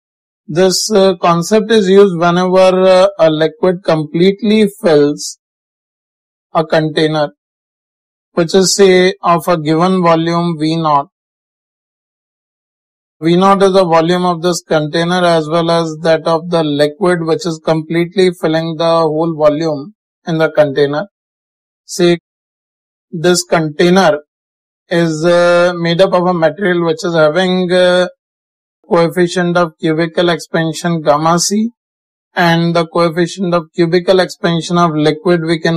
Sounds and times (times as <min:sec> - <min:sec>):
Speech: 0:00.5 - 0:05.4, 0:06.6 - 0:07.4, 0:08.4 - 0:11.1, 0:13.2 - 0:21.1, 0:21.9 - 0:22.2, 0:23.2 - 0:24.3, 0:24.9 - 0:28.2, 0:28.9 - 0:31.8, 0:32.4 - 0:35.7.